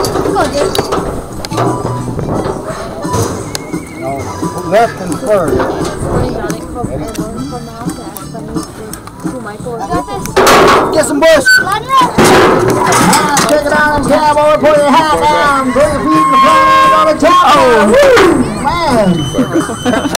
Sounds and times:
Music: 0.0 - 20.1
Speech: 12.8 - 19.3.

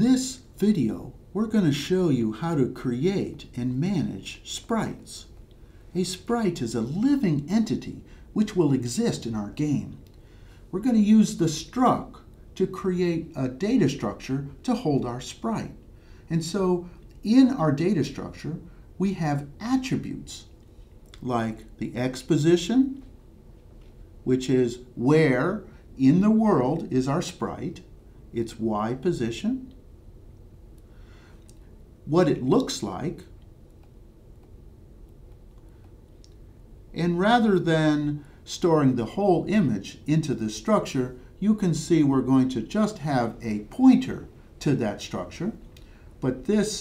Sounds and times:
Speech: 0.0 - 5.4, 6.0 - 10.1, 10.7 - 20.5, 21.2 - 23.1, 24.3 - 29.8, 32.1 - 33.4, 36.9 - 46.8.

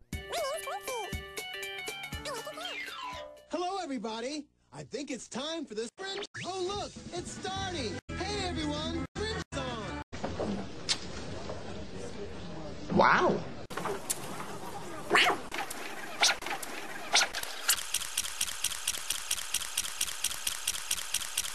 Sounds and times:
Speech: 3.5 - 10.0.

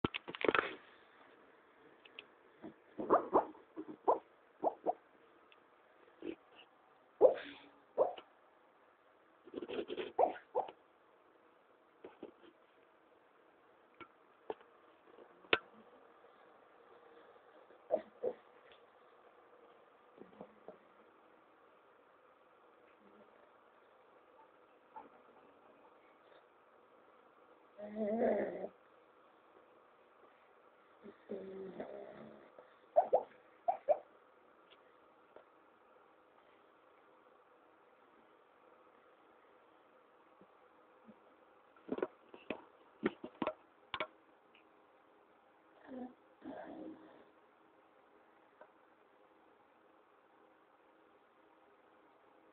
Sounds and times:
Bark: 3.0 - 5.0, 7.2 - 8.2, 33.0 - 34.0.

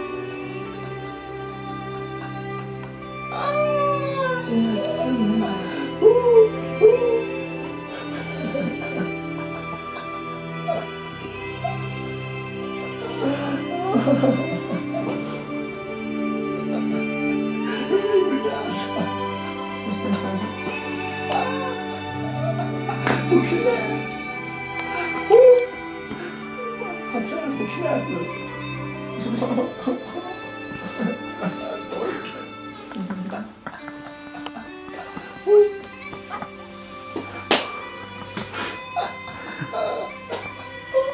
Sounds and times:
Music: 0.0 - 41.1.

